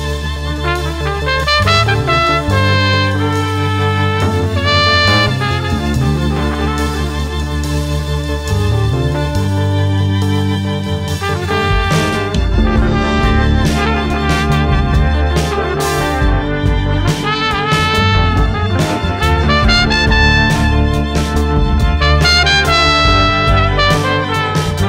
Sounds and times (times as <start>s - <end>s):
Funk: 0.6s - 24.8s.